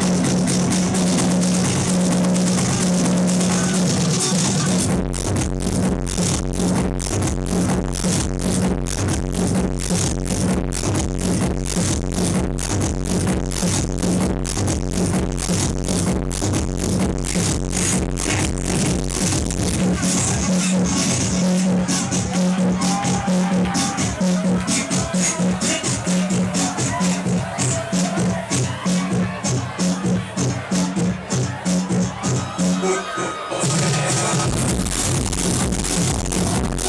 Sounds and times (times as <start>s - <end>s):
Dance music: 0.0s - 36.8s.